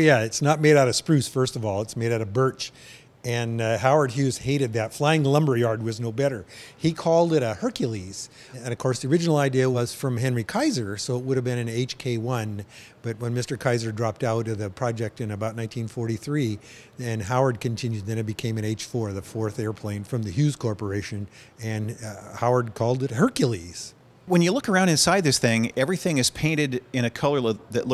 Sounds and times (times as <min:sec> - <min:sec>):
Speech: 0:00.0 - 0:27.9.